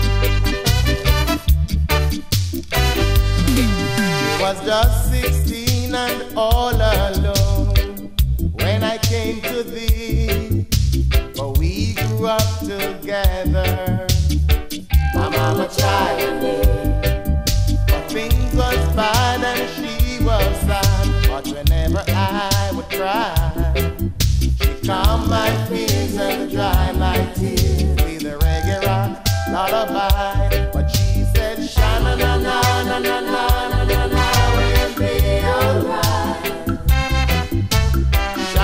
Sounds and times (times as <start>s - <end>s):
Music: 0.0s - 38.6s.